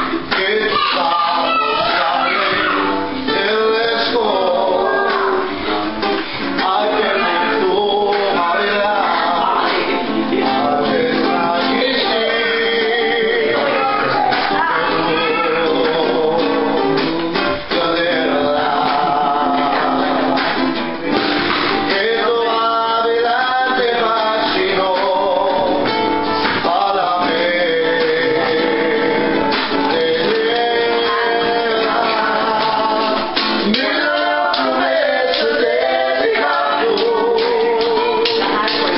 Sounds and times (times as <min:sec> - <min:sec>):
Male singing: 0:00.0 - 0:05.5, 0:06.6 - 0:20.6, 0:21.8 - 0:38.9
Music: 0:00.0 - 0:38.9
Speech: 0:00.6 - 0:03.0, 0:13.6 - 0:15.8.